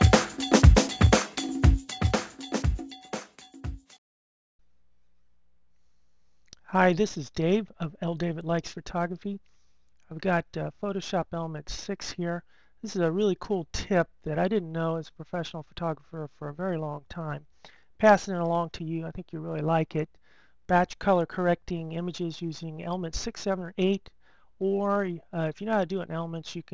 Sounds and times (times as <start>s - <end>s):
Speech: 6.6s - 9.4s, 10.1s - 17.4s, 18.0s - 20.1s, 20.7s - 26.7s.